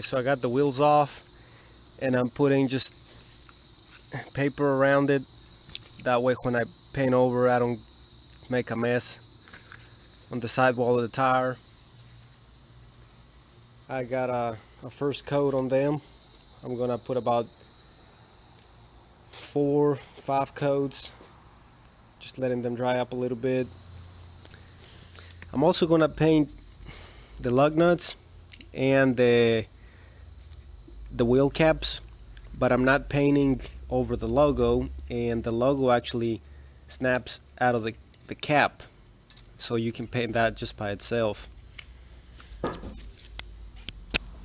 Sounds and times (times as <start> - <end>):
Speech: 0.0 - 1.2, 2.0 - 2.9, 4.2 - 5.2, 6.0 - 7.8, 8.5 - 9.2, 10.3 - 11.6, 13.9 - 16.0, 16.6 - 17.5, 19.4 - 21.2, 22.2 - 23.7, 25.5 - 26.5, 27.4 - 28.2, 28.8 - 29.7, 31.2 - 32.0, 32.6 - 38.9, 39.6 - 41.5
Outside, urban or manmade: 0.0 - 44.4.